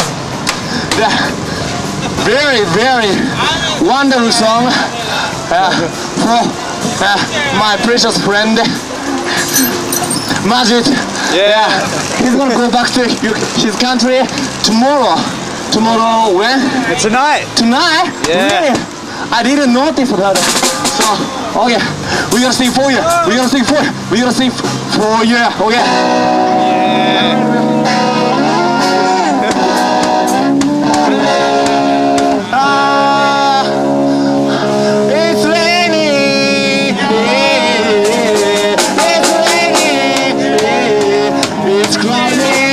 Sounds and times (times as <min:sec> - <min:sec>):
Music: 0:00.0 - 0:42.7
Speech: 0:10.4 - 0:29.0.